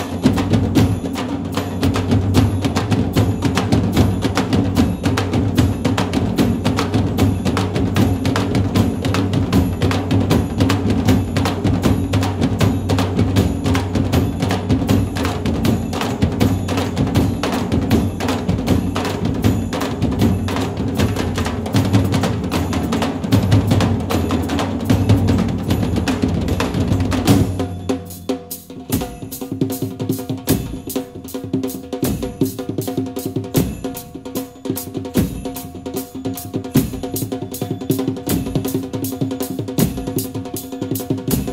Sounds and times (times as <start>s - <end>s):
Snare drum: 0.0s - 41.5s.